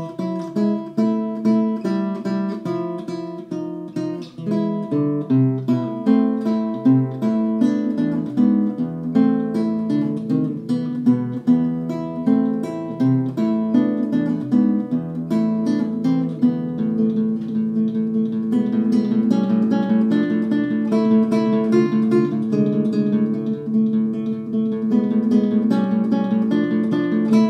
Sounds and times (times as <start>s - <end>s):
Strum: 0.0s - 27.5s.